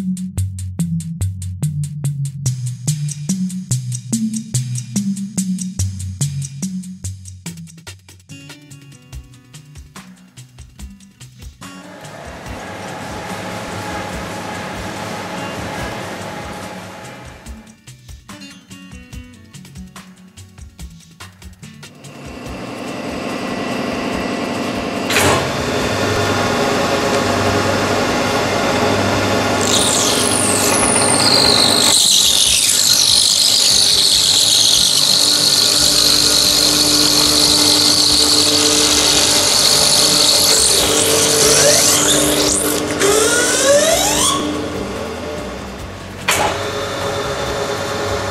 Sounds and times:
Tools: 0:29.6 - 0:44.6.

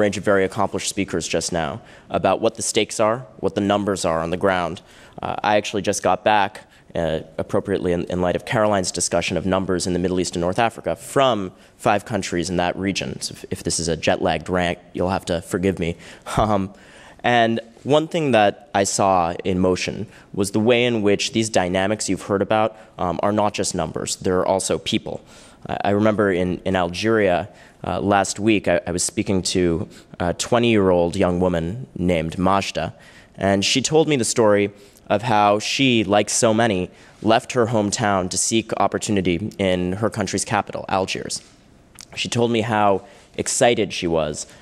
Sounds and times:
Male speech, man speaking: 0:00.0 - 0:41.4, 0:42.0 - 0:44.5
Narration, monologue: 0:00.0 - 0:44.6.

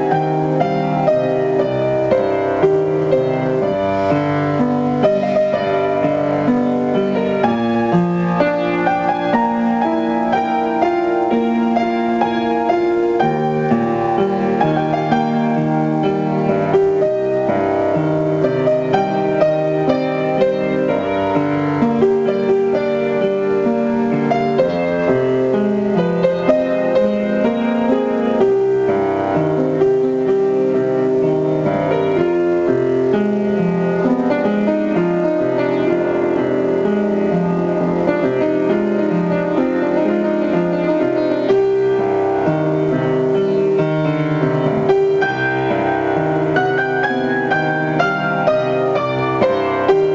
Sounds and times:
Music: 0:00.0 - 0:50.1.

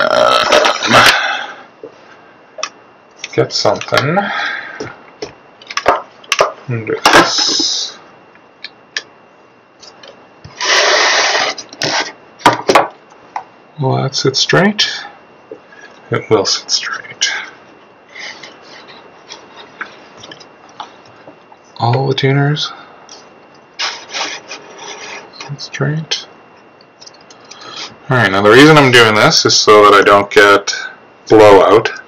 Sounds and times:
Inside, small room: 0:00.0 - 0:32.0
Speech: 0:03.3 - 0:04.3, 0:06.7 - 0:08.0, 0:13.8 - 0:15.2, 0:16.1 - 0:17.5, 0:21.8 - 0:22.8, 0:25.4 - 0:26.3, 0:28.1 - 0:32.0.

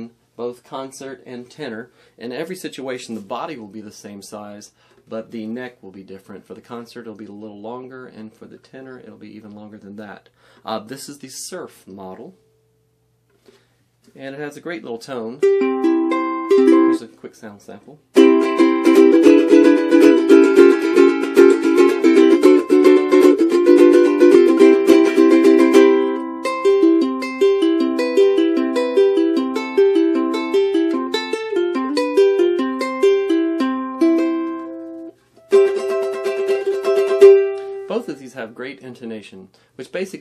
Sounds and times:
Music: 0:15.4 - 0:17.0, 0:18.2 - 0:38.2.

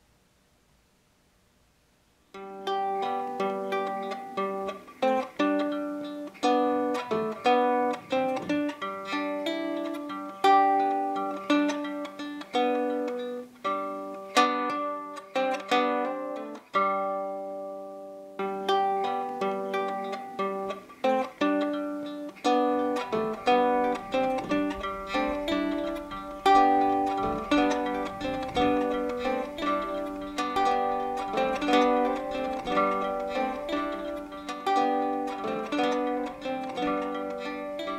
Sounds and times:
Guitar: 0:02.3 - 0:37.9
Ukulele: 0:02.3 - 0:37.9.

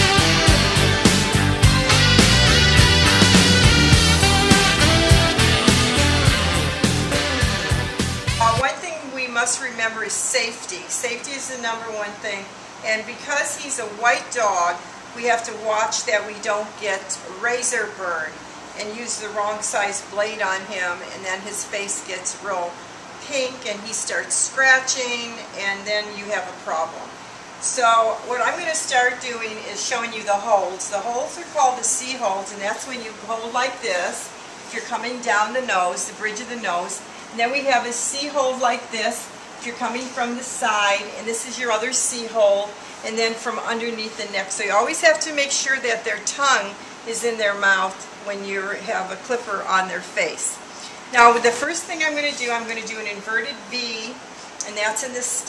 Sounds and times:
Speech: 0:08.4 - 0:55.4.

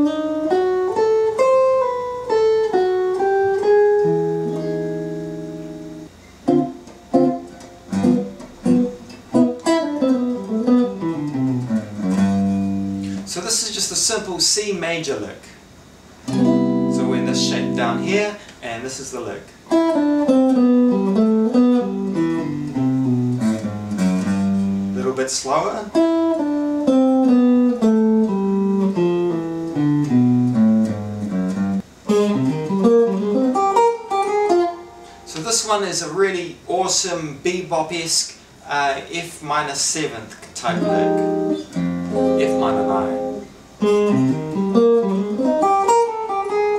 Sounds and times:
Electric guitar: 0:00.0 - 0:13.3, 0:16.2 - 0:18.6, 0:19.6 - 0:25.0, 0:25.9 - 0:35.4, 0:40.4 - 0:46.7
Speech: 0:13.2 - 0:15.6, 0:16.9 - 0:19.6, 0:25.0 - 0:26.0, 0:35.3 - 0:41.2, 0:42.4 - 0:43.3.

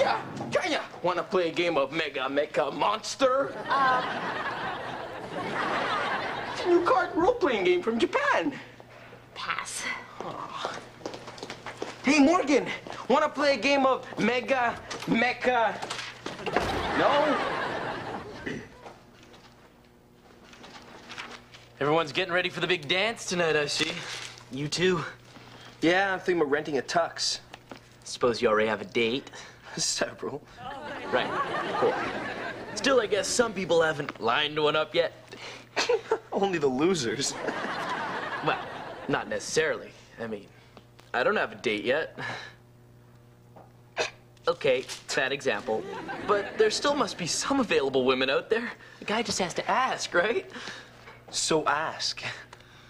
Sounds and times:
Speech: 0:00.0 - 0:03.6, 0:06.6 - 0:08.6, 0:12.0 - 0:15.8, 0:21.8 - 0:25.2, 0:25.8 - 0:27.5, 0:28.1 - 0:30.4, 0:32.8 - 0:35.2, 0:36.3 - 0:37.4, 0:38.4 - 0:40.5, 0:44.5 - 0:50.5, 0:51.3 - 0:52.5.

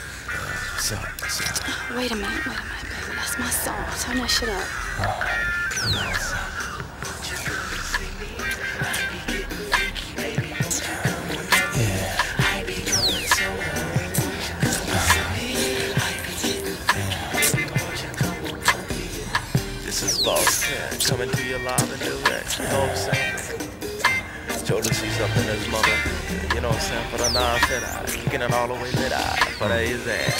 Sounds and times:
Music: 0:00.0 - 0:30.4
Singing: 0:00.0 - 0:30.4.

